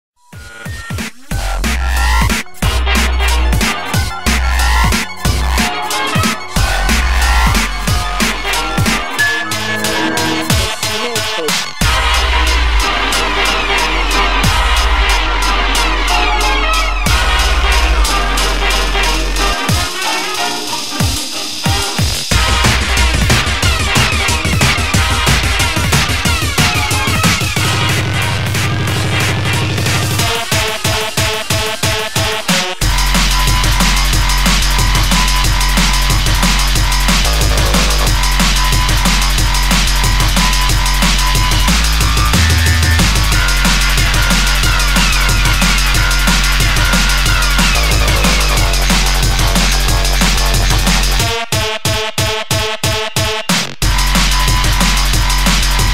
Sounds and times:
Electronic music: 0:00.2 - 0:55.9.

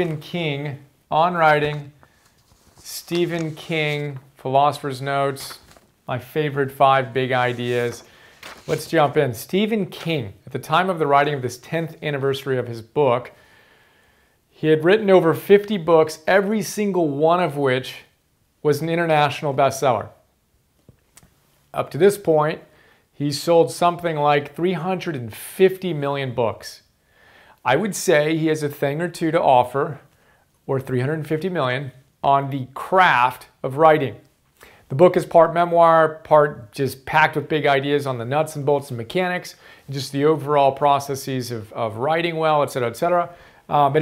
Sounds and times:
Speech: 0:00.0 - 0:02.0, 0:02.8 - 0:08.1, 0:08.7 - 0:13.4, 0:14.5 - 0:20.2, 0:21.7 - 0:26.9, 0:27.6 - 0:30.1, 0:30.7 - 0:34.3, 0:34.9 - 0:44.0.

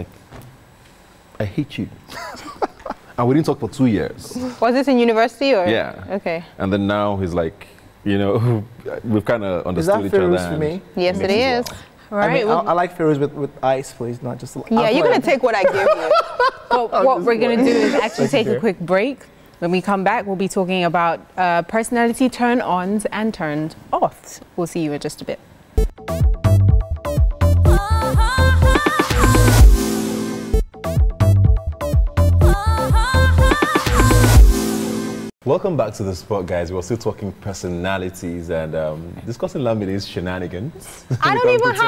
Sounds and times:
Dance music: 0:26.1 - 0:35.3.

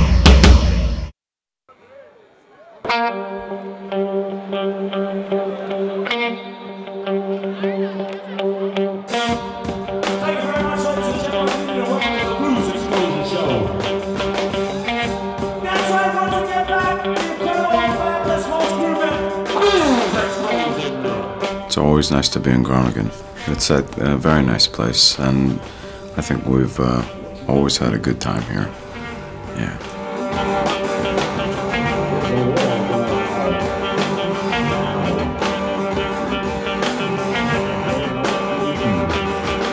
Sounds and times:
Blues: 0:01.7 - 0:39.7
Speech: 0:21.7 - 0:28.8, 0:29.5 - 0:29.8.

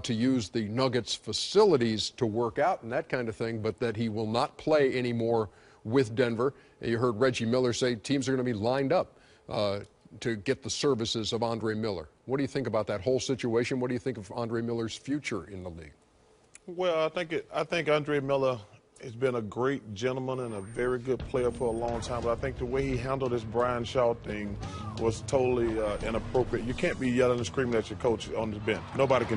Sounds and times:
Speech: 0:00.0 - 0:16.0, 0:16.7 - 0:29.3
Music: 0:20.8 - 0:29.3.

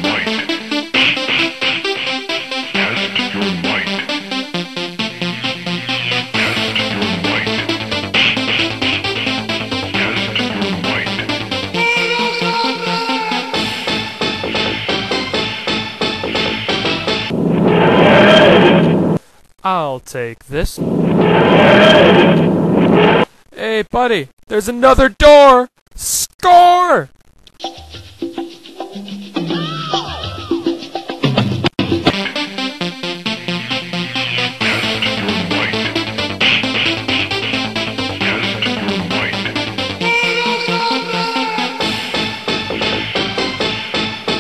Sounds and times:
Speech: 0:19.6 - 0:20.8, 0:23.6 - 0:27.1.

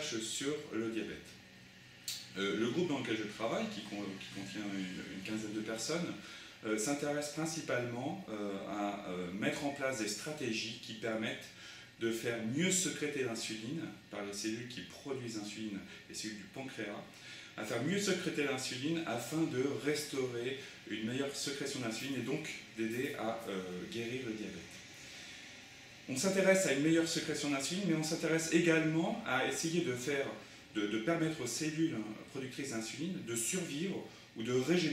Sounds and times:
Speech: 0:00.0 - 0:01.4, 0:02.1 - 0:24.8, 0:26.1 - 0:34.9.

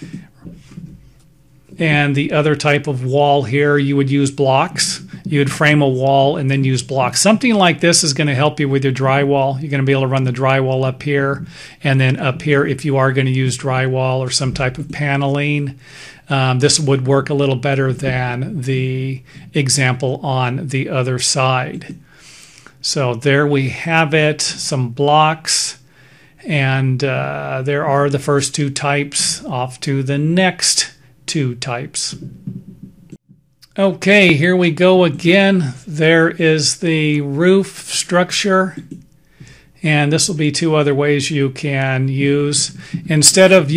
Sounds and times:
Speech: 0:01.8 - 0:22.0, 0:22.8 - 0:25.8, 0:26.4 - 0:32.3, 0:33.6 - 0:38.9, 0:39.8 - 0:43.7.

